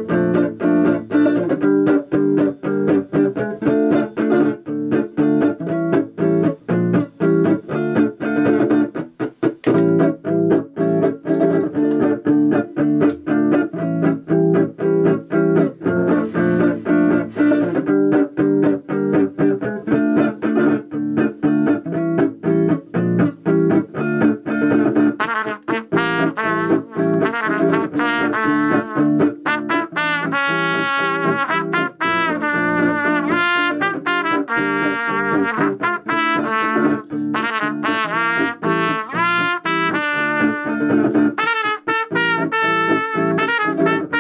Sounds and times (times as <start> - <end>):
Inside, small room: 0.0 - 44.2
Trumpet: 16.0 - 18.0, 25.0 - 44.2.